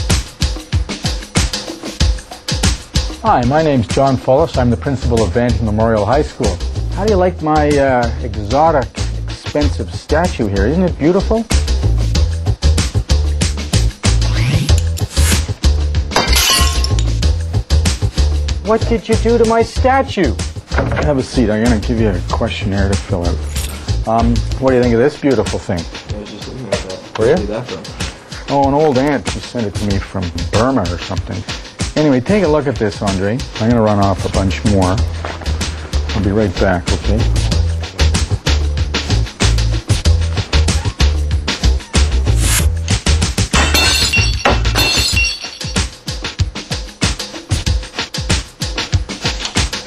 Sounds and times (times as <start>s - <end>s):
Music: 0.0s - 49.8s
Speech: 3.2s - 11.5s, 18.6s - 23.4s, 24.0s - 35.1s, 36.1s - 37.4s.